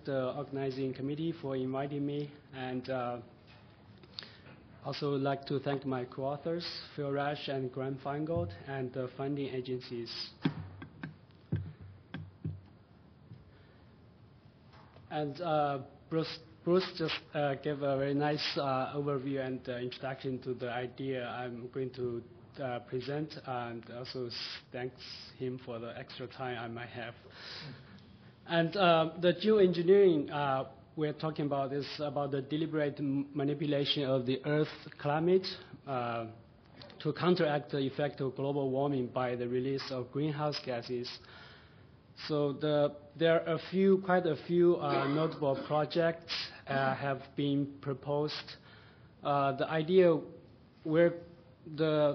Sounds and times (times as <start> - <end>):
Speech: 0.0 - 3.3, 4.8 - 10.5, 15.1 - 27.2, 28.5 - 41.2, 42.2 - 48.6, 49.2 - 52.1.